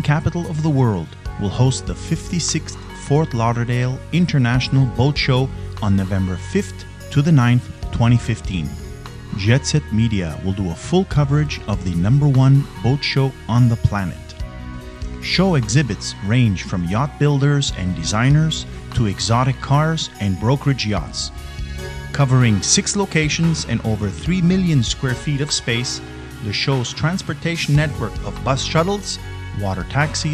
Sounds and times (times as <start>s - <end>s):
Speech: 0.0s - 14.4s, 15.2s - 21.3s, 22.1s - 30.3s
Music: 0.0s - 30.3s.